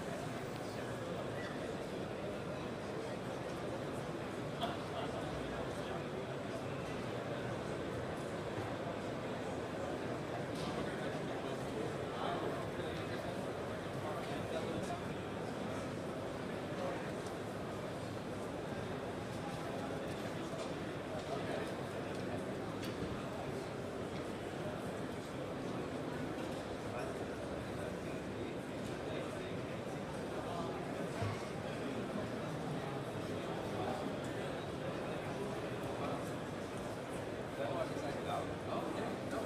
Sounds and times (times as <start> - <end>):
Speech: 0.0 - 39.4.